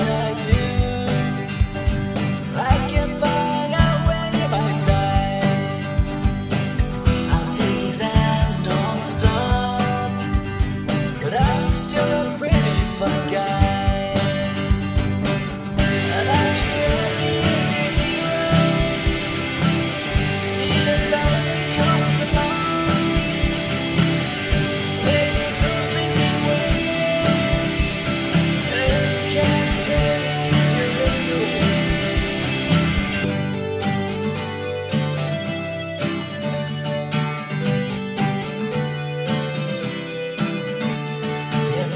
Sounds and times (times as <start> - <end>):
Music: 0.0 - 41.9.